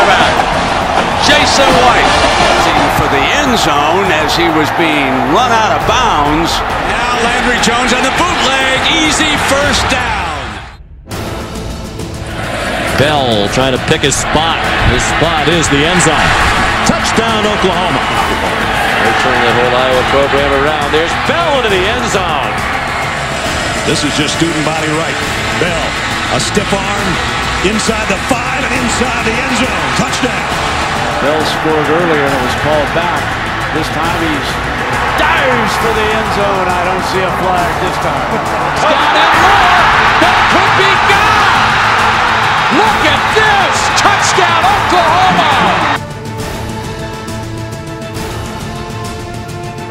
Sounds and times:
Music: 0:00.0 - 0:49.9
Speech: 0:01.2 - 0:10.5, 0:13.0 - 0:16.3, 0:16.9 - 0:18.1, 0:19.1 - 0:22.5, 0:23.9 - 0:30.5, 0:31.2 - 0:33.2, 0:33.8 - 0:34.6, 0:35.2 - 0:41.6, 0:42.7 - 0:46.0.

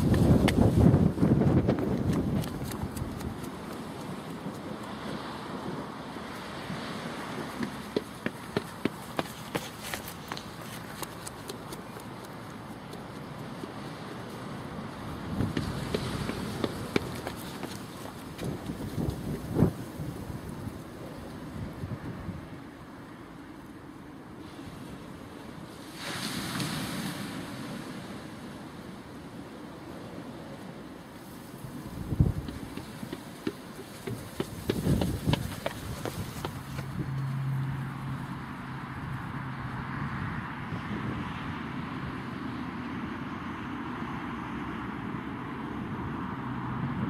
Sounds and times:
Outside, rural or natural: 0:00.0 - 0:47.0.

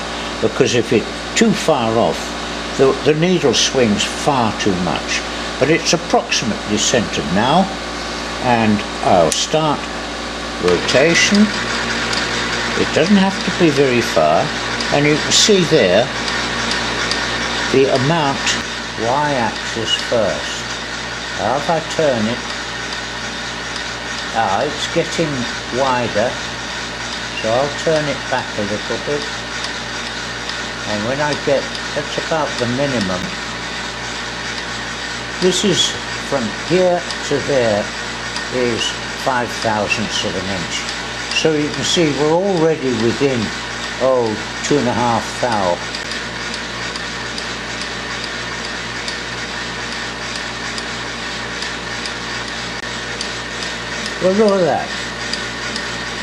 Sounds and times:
Engine: 0:00.0 - 0:56.2
Speech: 0:00.3 - 0:07.8, 0:08.4 - 0:09.9, 0:10.6 - 0:11.6, 0:12.8 - 0:16.2, 0:17.7 - 0:20.8, 0:21.4 - 0:22.4, 0:24.3 - 0:26.5, 0:27.4 - 0:29.4, 0:30.8 - 0:33.4, 0:35.4 - 0:45.9, 0:54.1 - 0:55.0.

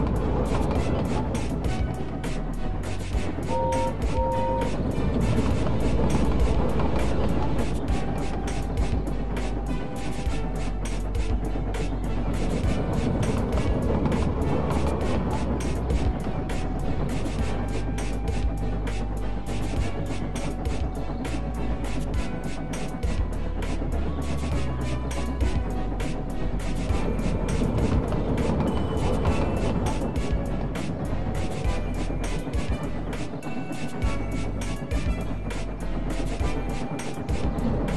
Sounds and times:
Music: 0:00.0 - 0:37.9.

